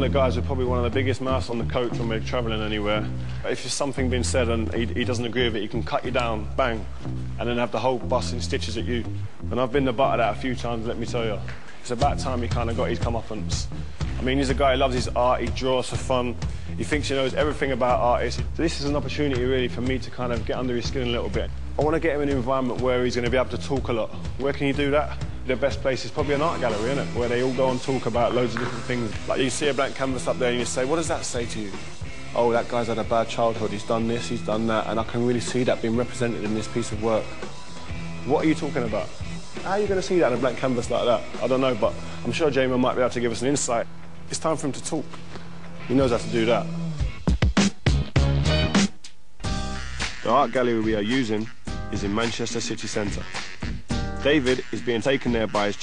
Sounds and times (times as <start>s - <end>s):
Speech: 0.0s - 31.8s, 32.4s - 37.4s, 38.2s - 45.1s, 45.9s - 46.7s, 50.2s - 53.4s, 54.2s - 55.8s
Music: 0.0s - 55.8s.